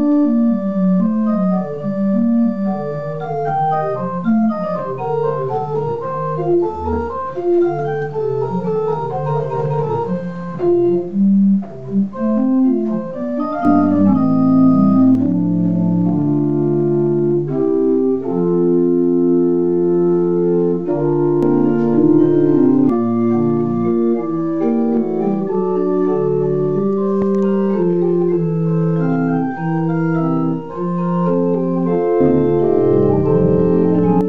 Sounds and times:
Organ: 0.0s - 34.2s.

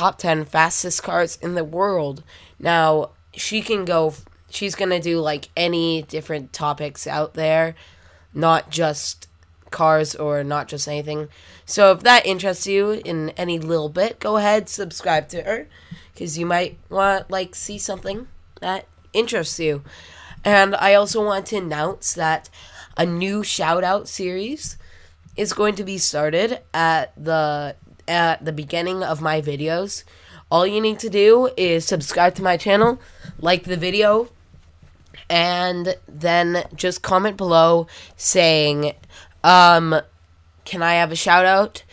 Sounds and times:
Speech: 0.0s - 7.8s, 8.4s - 24.8s, 25.4s - 34.3s, 35.2s - 41.8s.

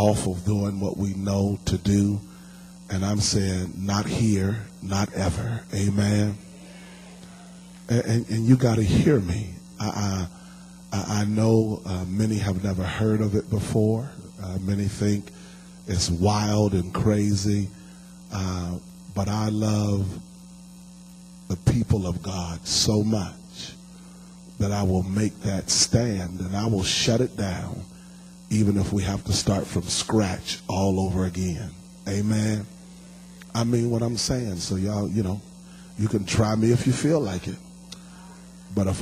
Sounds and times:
Speech: 0.0s - 2.3s, 2.9s - 6.6s, 7.9s - 10.3s, 10.9s - 20.2s, 21.5s - 23.8s, 24.6s - 27.9s, 28.5s - 32.8s, 33.4s - 37.7s, 38.7s - 39.0s.

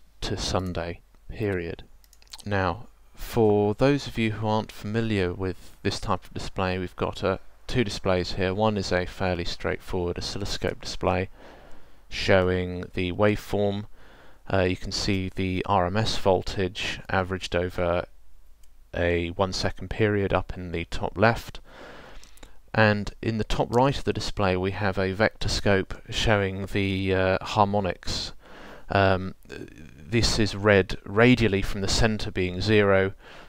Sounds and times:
Speech: 0.2s - 11.3s, 12.1s - 13.9s, 14.5s - 18.1s, 19.0s - 21.6s, 22.7s - 33.2s.

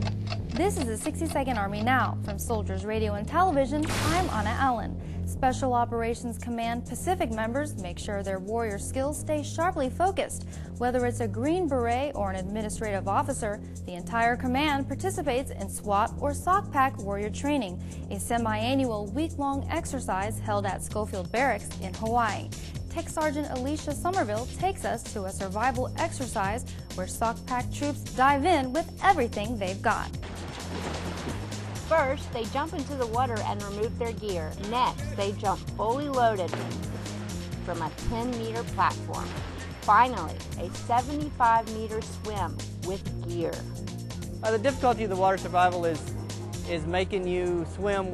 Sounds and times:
Music: 0.0s - 48.1s
Speech: 0.6s - 22.4s, 23.0s - 30.0s, 31.9s - 36.5s, 39.9s - 43.6s.

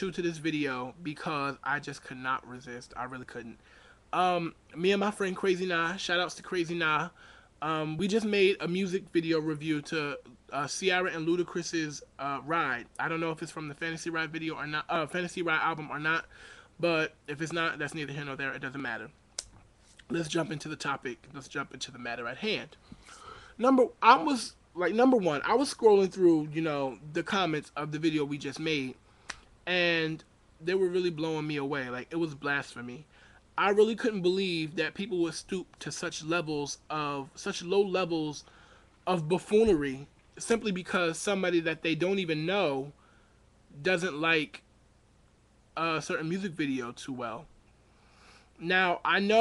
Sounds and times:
Speech: 0.0s - 19.2s, 20.0s - 22.8s, 23.6s - 29.0s, 29.7s - 43.0s, 43.7s - 44.7s, 45.8s - 47.5s, 48.6s - 49.4s.

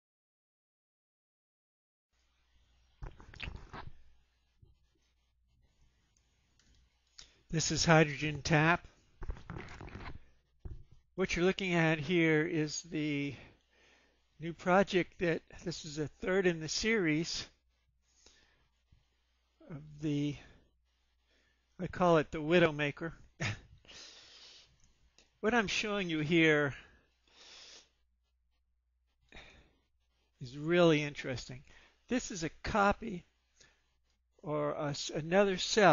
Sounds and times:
Speech: 7.5s - 8.9s, 11.2s - 13.5s, 14.4s - 17.6s, 19.6s - 20.5s, 21.8s - 23.6s, 25.4s - 26.9s, 30.4s - 33.3s, 34.4s - 35.9s.

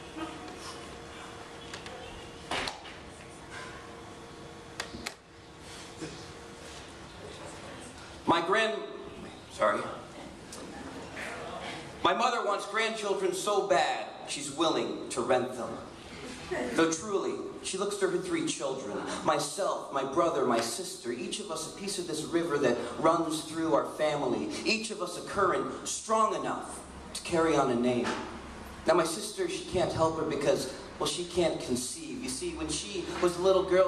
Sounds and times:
Speech: 7.2s - 15.9s, 16.5s - 28.2s, 28.9s - 33.8s.

